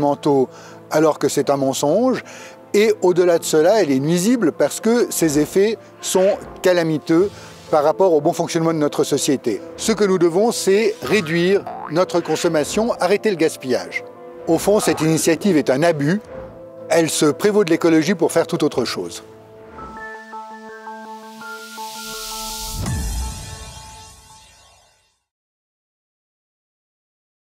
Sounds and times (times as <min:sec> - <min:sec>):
Speech: 0:00.0 - 0:02.2, 0:02.8 - 0:16.2, 0:16.9 - 0:19.3
Music: 0:00.0 - 0:25.4.